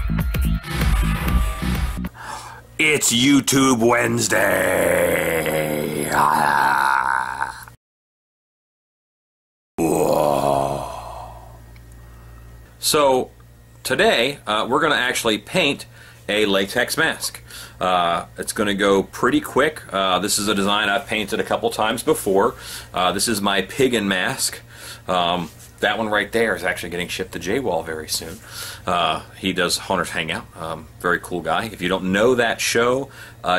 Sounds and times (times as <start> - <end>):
Groan: 4.3 - 7.8, 9.8 - 11.6.